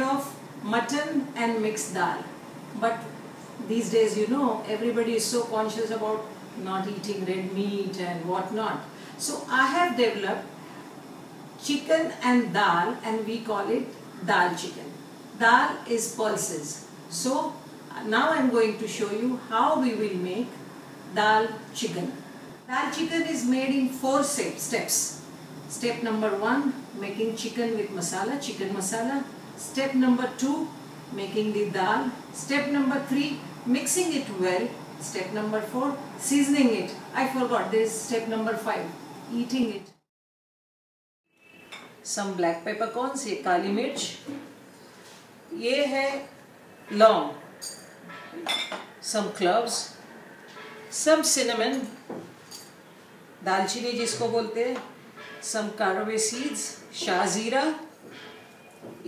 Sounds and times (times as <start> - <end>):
Speech: 0.0 - 10.5, 11.6 - 20.5, 21.2 - 40.0, 42.1 - 44.5, 45.5 - 46.3, 49.0 - 50.0, 51.0 - 52.0, 53.4 - 57.9.